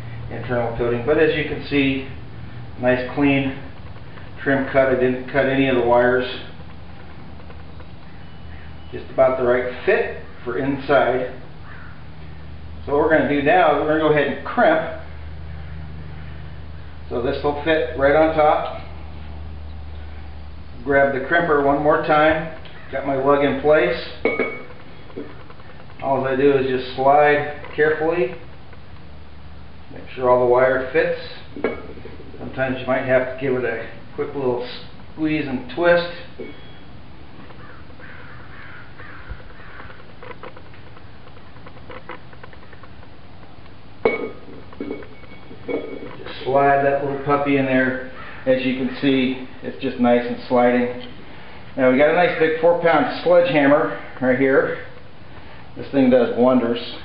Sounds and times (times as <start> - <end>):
Speech: 0.3 - 2.2, 2.8 - 3.7, 4.4 - 6.6, 8.9 - 11.4, 12.8 - 15.1, 17.1 - 18.9, 20.8 - 24.2, 26.0 - 28.5, 29.9 - 31.6, 32.4 - 36.4, 46.0 - 51.1, 51.8 - 55.0, 55.8 - 57.0.